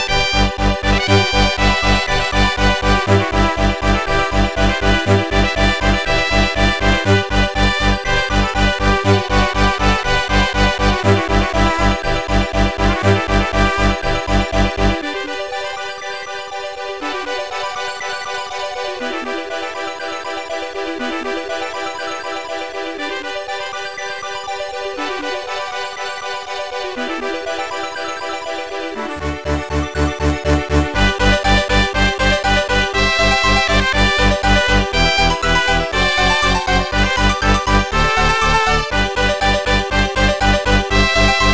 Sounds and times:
Soundtrack music: 0:00.0 - 0:41.5.

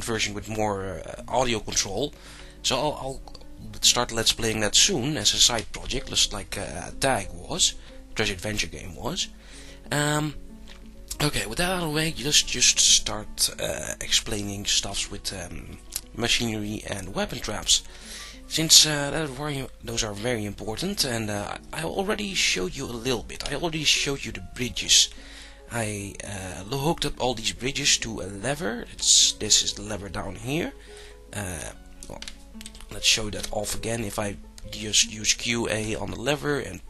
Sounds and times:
Narration, monologue: 0:00.0 - 0:36.9.

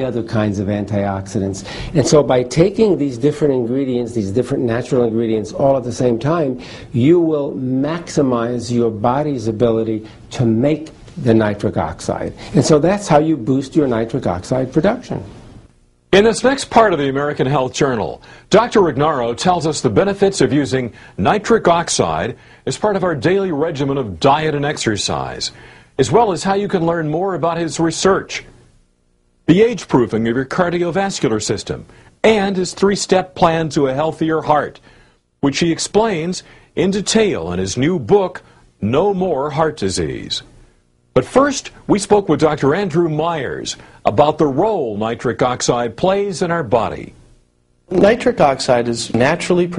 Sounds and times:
Speech: 0:00.0 - 0:15.3, 0:16.1 - 0:28.5, 0:29.5 - 0:34.8, 0:35.4 - 0:40.5, 0:41.2 - 0:47.2, 0:47.9 - 0:49.7.

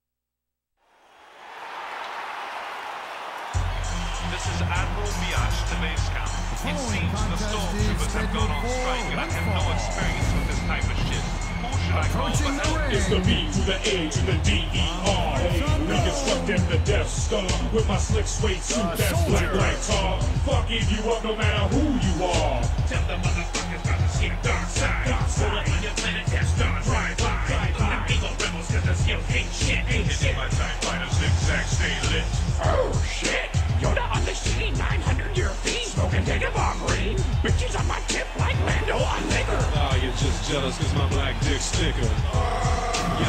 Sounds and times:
Music: 0:03.2 - 0:43.2
Speech: 0:04.4 - 0:23.0, 0:33.9 - 0:43.2.

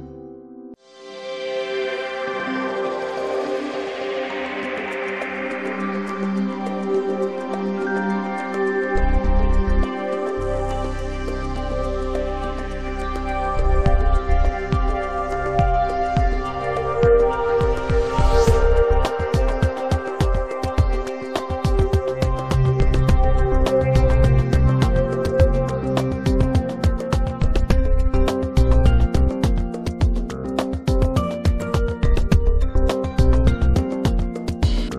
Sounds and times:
New-age music: 0:00.0 - 0:34.9
Soundtrack music: 0:00.0 - 0:34.9
Tender music: 0:00.0 - 0:34.9.

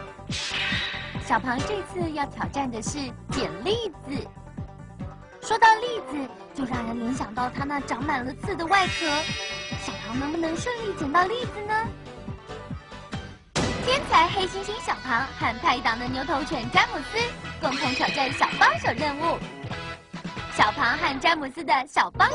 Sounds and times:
Music: 0:00.0 - 0:22.3
Speech: 0:01.3 - 0:04.3, 0:05.4 - 0:11.9, 0:13.8 - 0:19.5, 0:20.6 - 0:22.3.

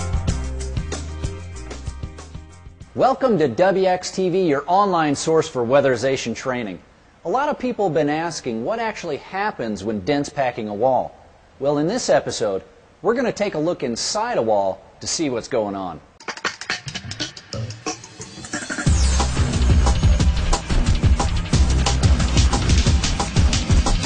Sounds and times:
Speech: 0:03.0 - 0:16.1.

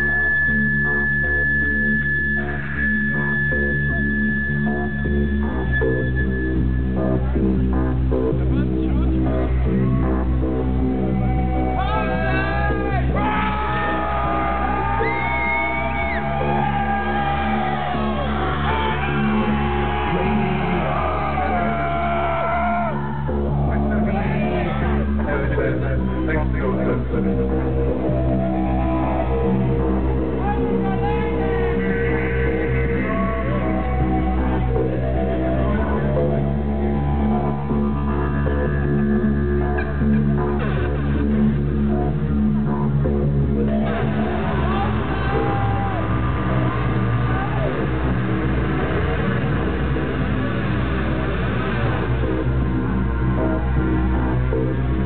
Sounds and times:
Music: 0:00.0 - 0:55.0.

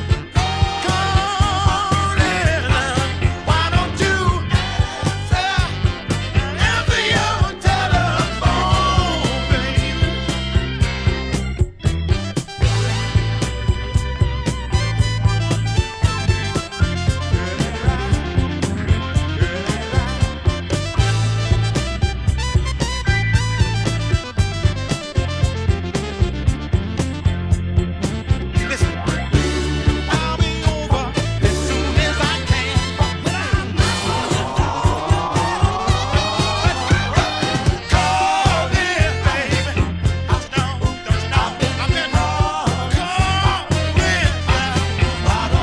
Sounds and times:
Funk: 0:00.0 - 0:45.6
Ska: 0:00.0 - 0:45.6.

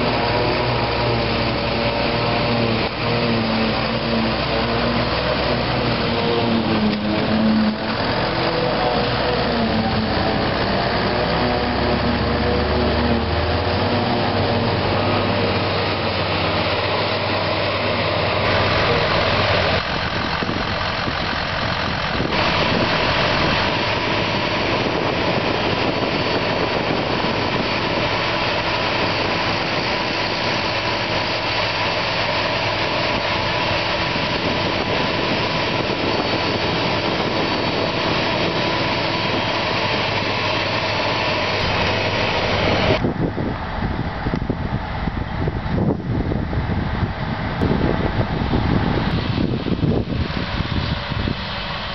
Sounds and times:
Vehicle: 0:00.0 - 0:51.9.

